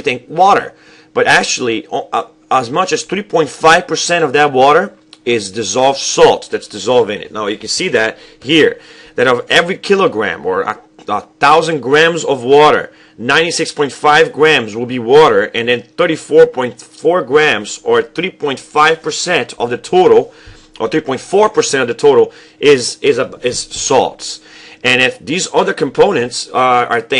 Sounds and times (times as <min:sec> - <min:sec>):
Speech: 0:00.0 - 0:27.1.